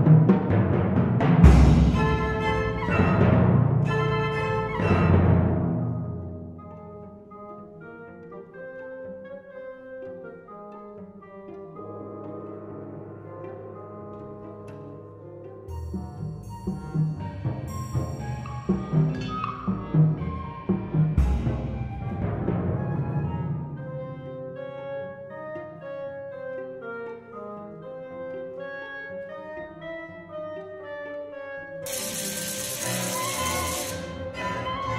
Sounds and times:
Drum kit: 0.0 - 3.4
Timpani: 0.0 - 7.1, 12.2 - 25.1, 31.8 - 34.9
Pizzicato: 0.0 - 31.8, 32.8 - 34.9
Cello: 0.0 - 34.9
Orchestra: 0.0 - 34.9.

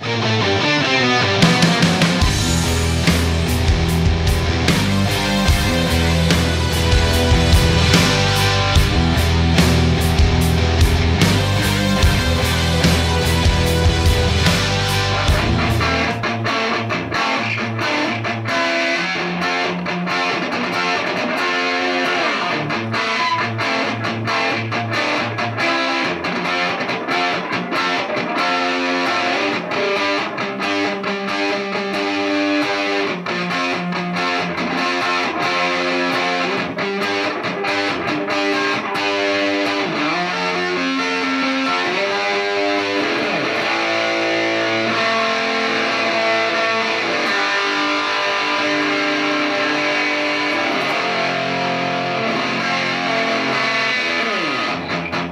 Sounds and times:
Music: 0.0 - 55.3.

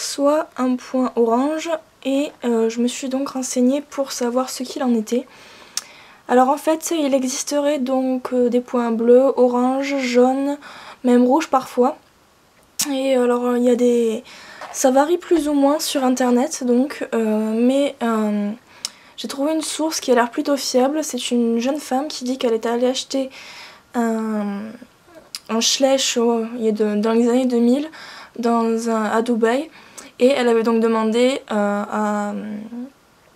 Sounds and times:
Speech: 0.0 - 5.3, 6.3 - 12.0, 12.8 - 18.6, 19.2 - 23.4, 24.0 - 33.0.

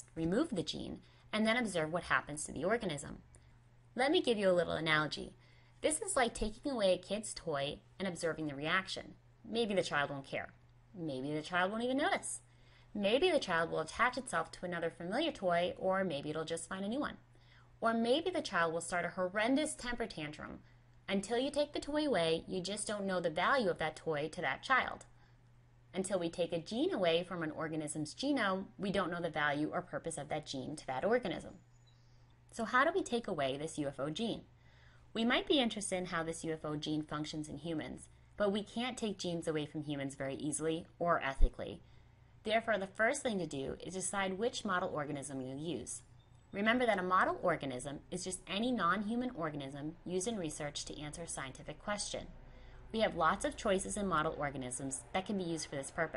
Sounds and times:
Speech: 0.0 - 3.3, 4.0 - 17.2, 17.8 - 25.1, 25.9 - 31.6, 32.6 - 34.5, 35.2 - 41.8, 42.5 - 56.1.

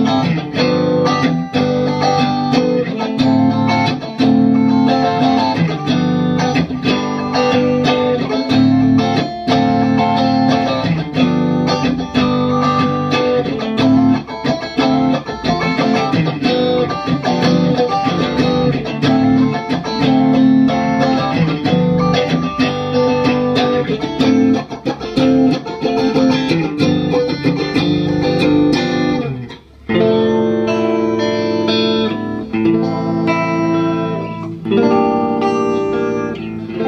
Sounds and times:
Electric guitar: 0.0 - 36.8
Strum: 0.0 - 36.8.

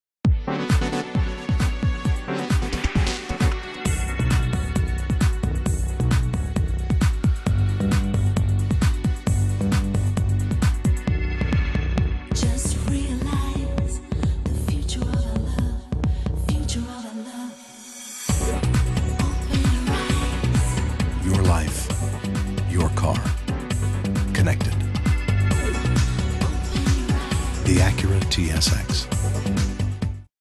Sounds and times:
House music: 0.3 - 16.0, 18.3 - 30.3
Tender music: 0.3 - 30.3
Speech: 21.2 - 21.9, 22.7 - 23.4, 24.3 - 24.8, 27.6 - 29.1.

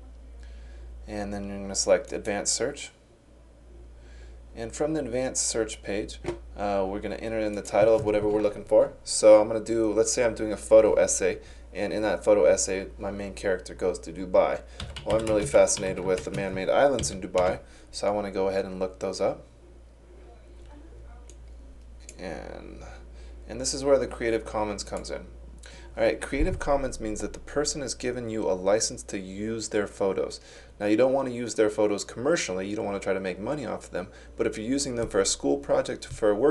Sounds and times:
Speech: 1.0 - 3.0, 4.6 - 19.5, 22.1 - 36.5.

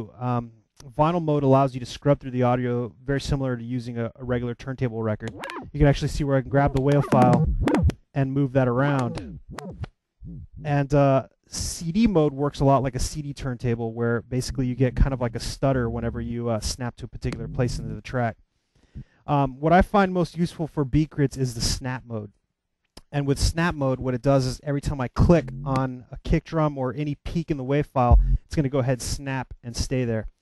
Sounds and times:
Speech: 0.0 - 7.5, 8.1 - 9.3, 10.3 - 18.4, 19.3 - 22.3, 23.0 - 30.3
Scratching (performance technique): 5.1 - 10.8, 14.4 - 18.2, 25.2 - 25.9, 28.1 - 28.6.

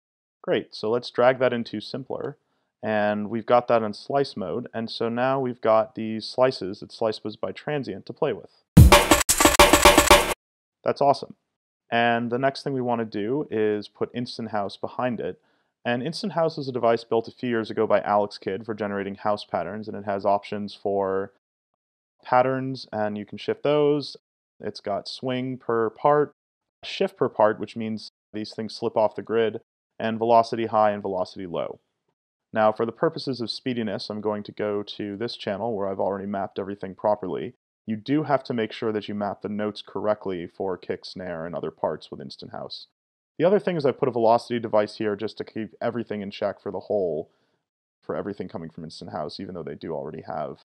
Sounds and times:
Speech: 0.4 - 8.6, 10.8 - 21.4, 22.2 - 31.8, 32.6 - 47.3, 48.0 - 50.6.

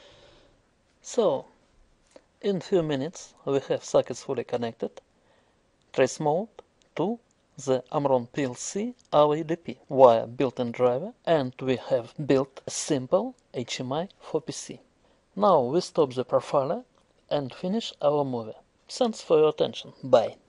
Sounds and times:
Narration, monologue: 0.0 - 20.4.

